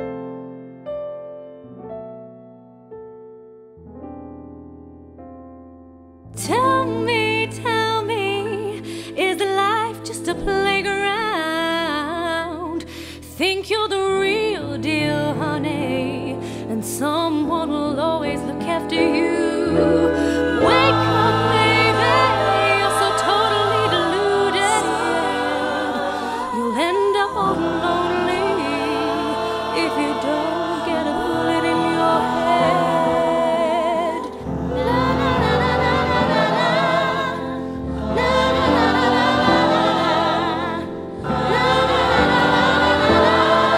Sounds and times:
Music: 0:00.0 - 0:43.7.

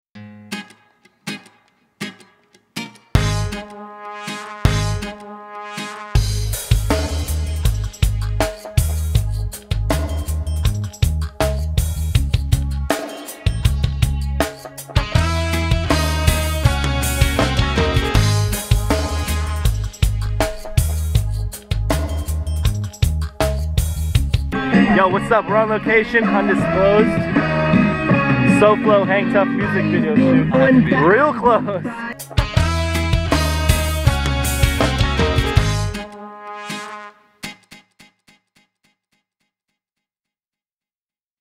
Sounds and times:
Music: 0:00.2 - 0:38.7
Speech: 0:24.7 - 0:27.2, 0:28.5 - 0:32.2.

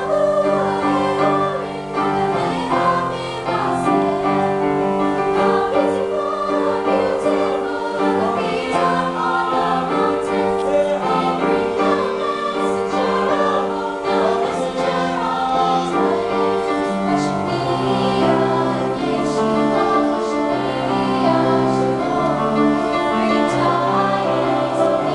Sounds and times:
Choir: 0:00.0 - 0:25.1
Gospel music: 0:00.0 - 0:25.1.

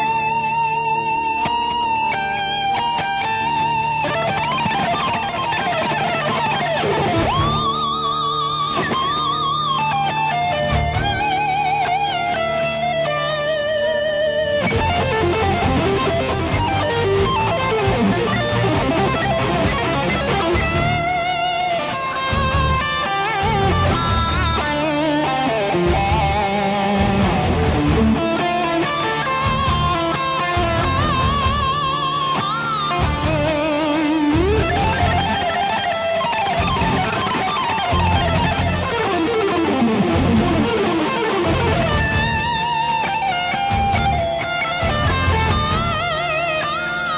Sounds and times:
Strum: 0:00.0 - 0:47.1.

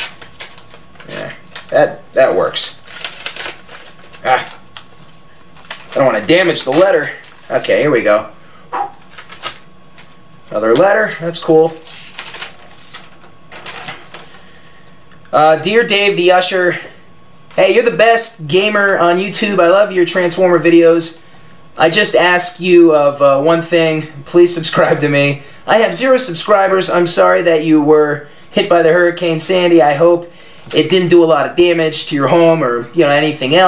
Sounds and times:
Inside, small room: 0:00.0 - 0:33.6
Speech: 0:01.1 - 0:02.8, 0:06.0 - 0:08.3, 0:10.5 - 0:11.8, 0:15.3 - 0:16.9, 0:17.6 - 0:21.2, 0:21.8 - 0:33.6.

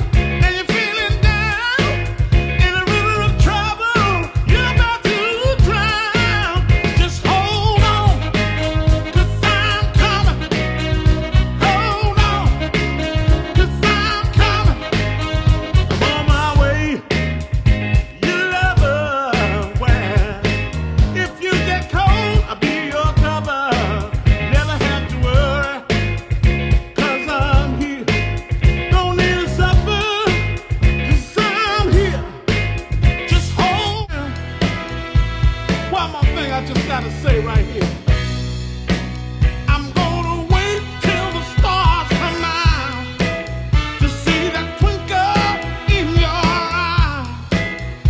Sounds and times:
Ska: 0:00.0 - 0:48.0
Soul music: 0:00.0 - 0:48.0.

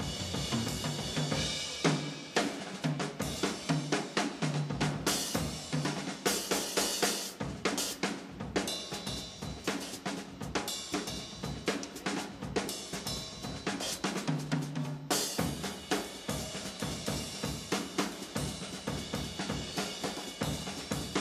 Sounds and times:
Rimshot: 0:00.0 - 0:04.0
Drum kit: 0:00.0 - 0:21.2.

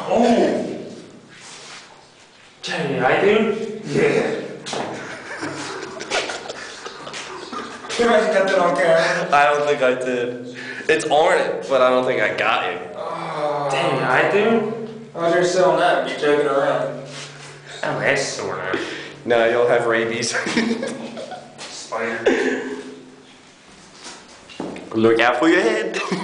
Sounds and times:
Speech: 0:00.0 - 0:00.9, 0:02.6 - 0:04.6, 0:07.9 - 0:17.1, 0:24.9 - 0:26.1.

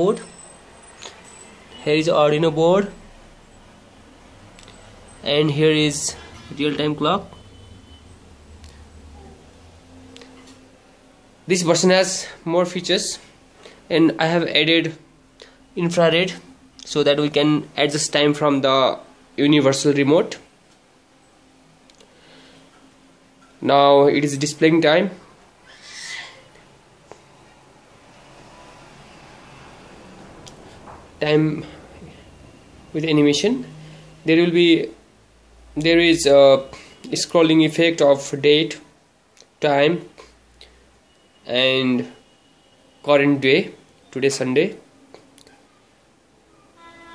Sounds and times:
Speech: 0:01.8 - 0:03.0, 0:05.2 - 0:07.3, 0:11.5 - 0:13.2, 0:13.9 - 0:15.0, 0:15.8 - 0:20.5, 0:23.6 - 0:25.2, 0:31.2 - 0:31.7, 0:32.9 - 0:33.7, 0:34.3 - 0:35.0, 0:35.8 - 0:38.9, 0:39.6 - 0:40.2, 0:41.5 - 0:42.2, 0:43.1 - 0:44.8.

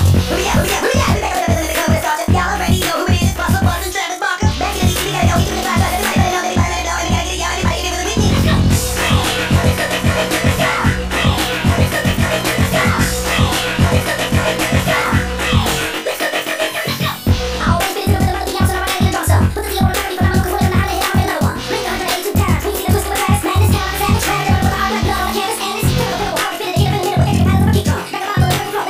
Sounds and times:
Music: 0:00.0 - 0:28.9.

